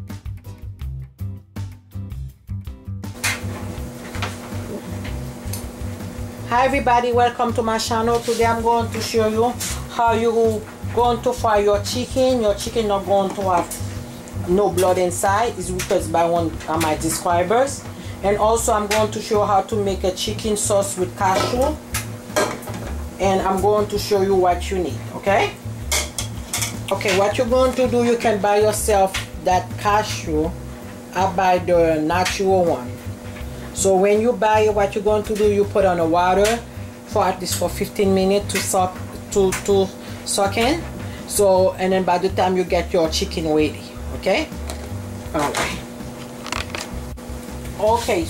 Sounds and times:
Music: 0.0 - 48.2
Speech: 6.5 - 13.8, 14.4 - 21.8, 23.2 - 25.6, 26.9 - 30.5, 31.1 - 32.9, 33.8 - 44.5, 45.3 - 45.8, 47.8 - 48.2.

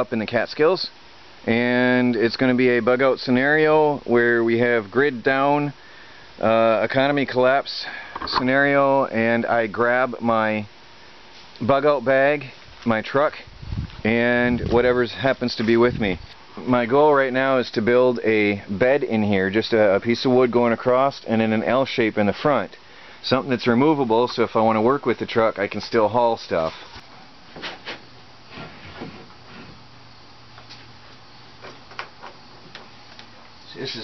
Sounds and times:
Speech: 0.0 - 5.8, 6.4 - 10.7, 11.6 - 26.8, 33.7 - 34.0.

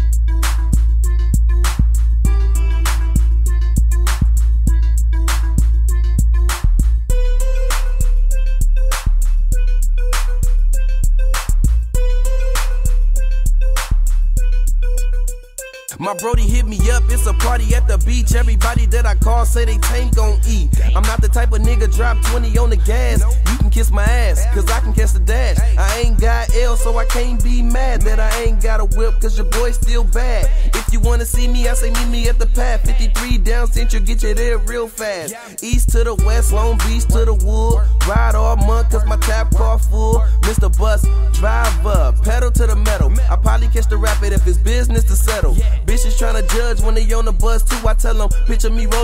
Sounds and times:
Music: 0.0 - 49.0.

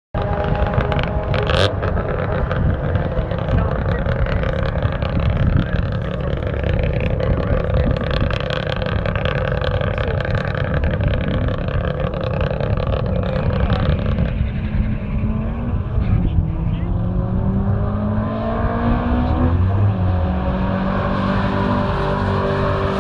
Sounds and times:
Outside, rural or natural: 0.1 - 23.0
Vehicle: 0.2 - 23.0.

